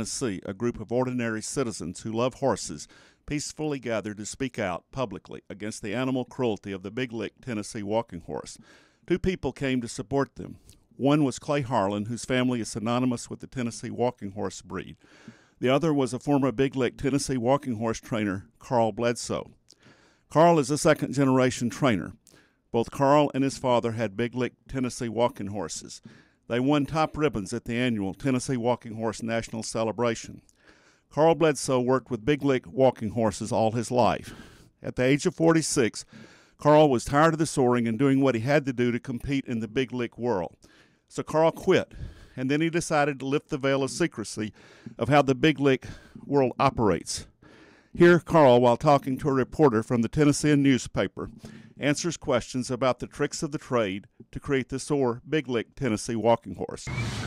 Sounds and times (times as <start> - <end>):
Speech: 0.0 - 15.0, 15.6 - 19.6, 20.3 - 22.2, 22.8 - 30.5, 31.1 - 47.3, 48.0 - 56.9.